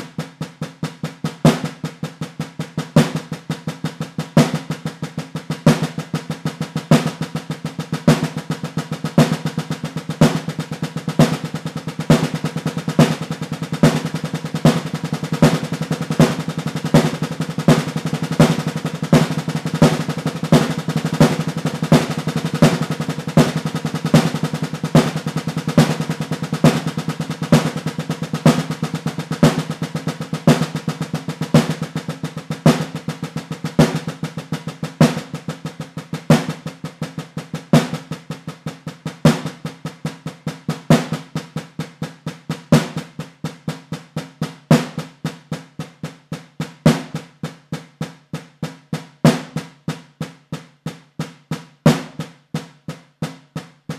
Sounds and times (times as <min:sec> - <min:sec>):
Drum roll: 0:00.0 - 0:53.9.